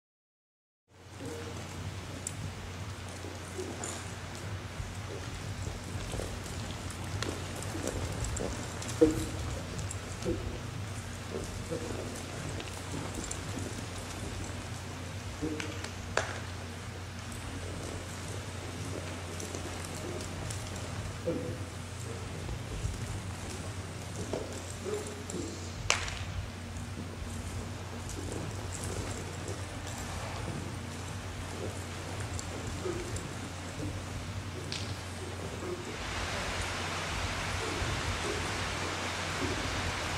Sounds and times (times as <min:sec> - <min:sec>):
Animal: 0:03.2 - 0:04.4, 0:05.0 - 0:16.4, 0:17.3 - 0:25.8, 0:27.3 - 0:36.6, 0:37.5 - 0:39.7.